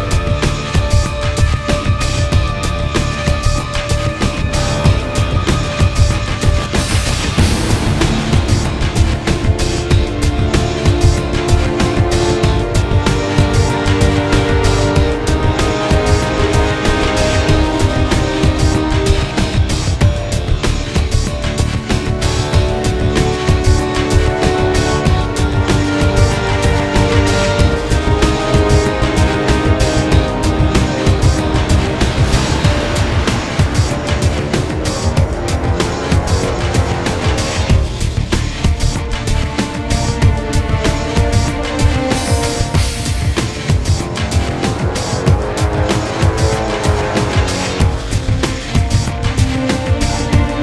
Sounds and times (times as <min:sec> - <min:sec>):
Angry music: 0:00.0 - 0:50.6.